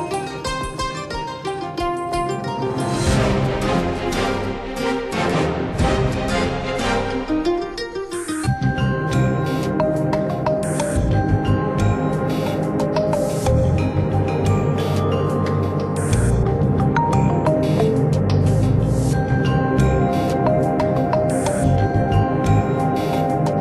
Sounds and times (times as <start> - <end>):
Tender music: 0.0 - 23.6.